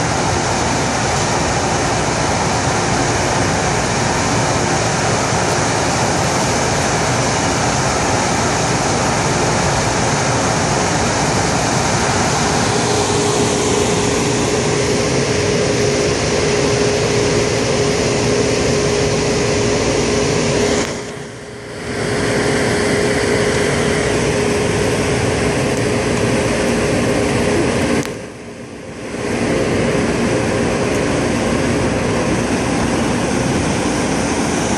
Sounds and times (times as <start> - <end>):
Outside, rural or natural: 0.0 - 34.7.